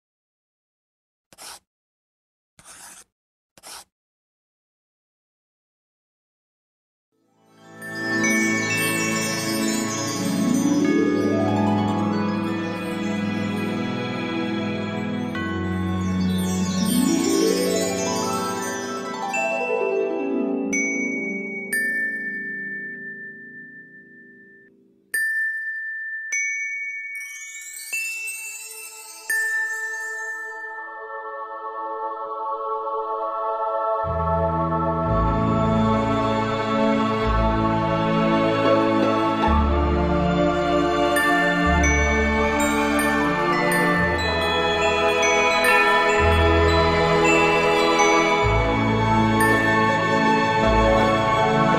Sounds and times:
Music: 7.1s - 51.7s.

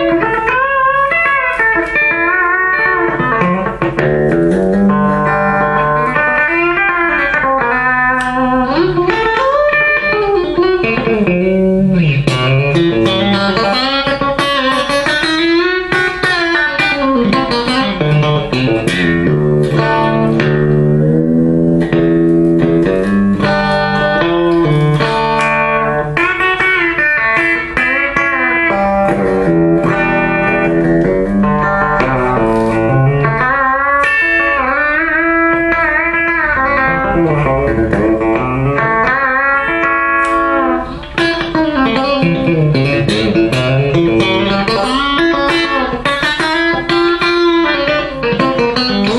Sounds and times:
Music: 0.0s - 49.1s.

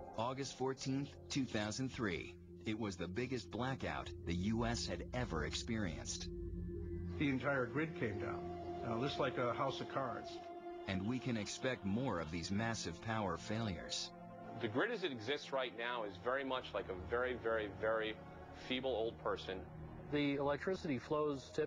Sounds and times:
Music: 0.0s - 21.6s
Speech: 0.1s - 6.3s, 7.2s - 21.6s.

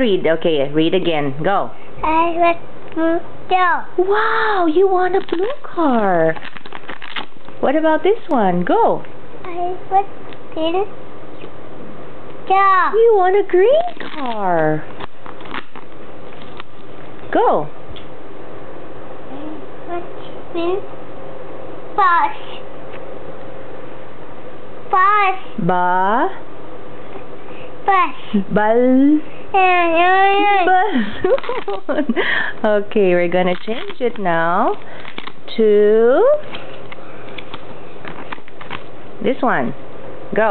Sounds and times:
Speech: 0.0s - 6.4s, 7.6s - 10.0s, 12.5s - 14.9s, 27.9s - 30.9s, 32.6s - 34.8s, 35.5s - 36.4s, 39.2s - 39.8s.

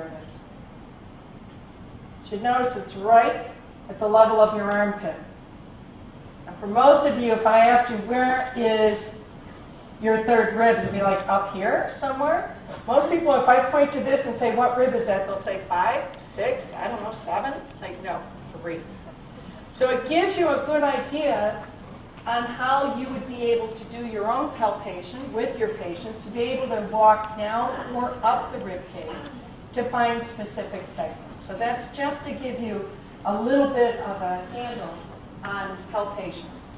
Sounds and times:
Female speech, woman speaking: 0.0s - 0.5s, 2.3s - 5.3s, 6.5s - 9.2s, 10.0s - 19.0s, 19.8s - 36.6s.

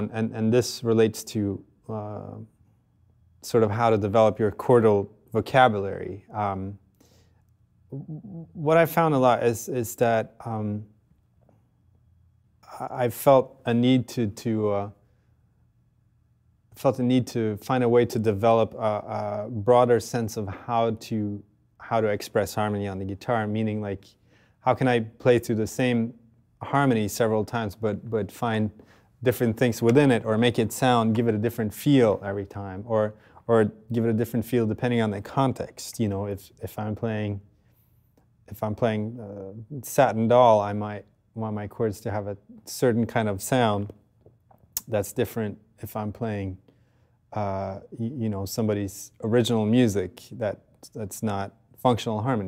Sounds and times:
Speech: 0.0s - 2.5s, 3.4s - 6.8s, 8.0s - 10.9s, 12.6s - 15.0s, 16.8s - 37.5s, 38.5s - 44.0s, 44.8s - 46.6s, 47.3s - 52.4s.

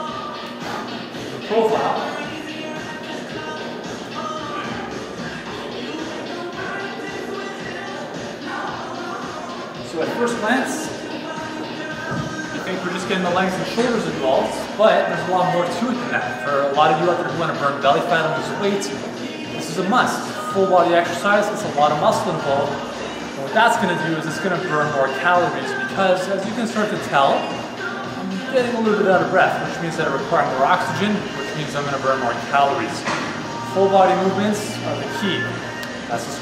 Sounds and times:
Inside, large room or hall: 0.0s - 17.4s, 18.1s - 28.8s
Music: 0.0s - 36.4s.

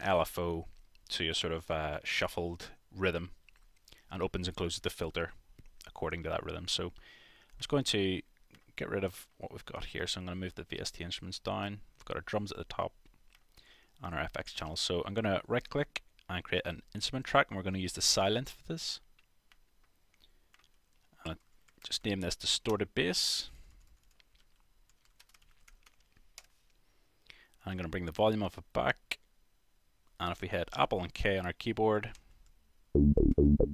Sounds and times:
Speech: 0.0s - 3.4s, 4.1s - 7.0s, 7.6s - 13.0s, 14.0s - 19.1s, 21.2s - 23.6s, 27.6s - 29.3s, 30.2s - 32.2s.

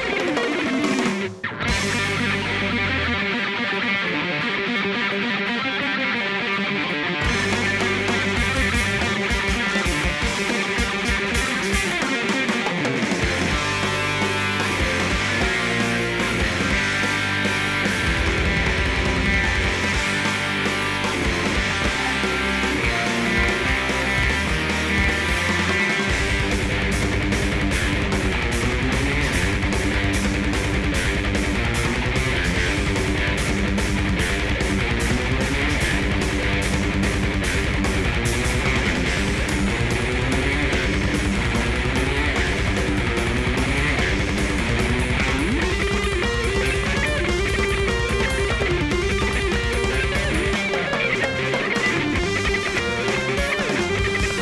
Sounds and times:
Electric guitar: 0.0s - 54.4s.

